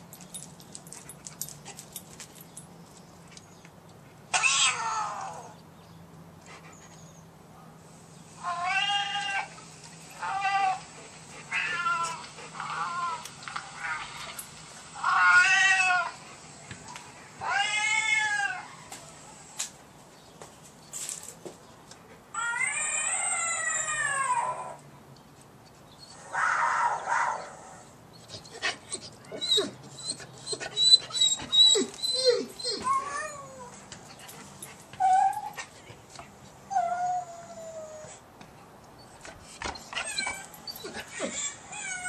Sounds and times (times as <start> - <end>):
Meow: 4.4 - 5.5, 8.4 - 9.5, 15.0 - 16.1, 17.4 - 18.8.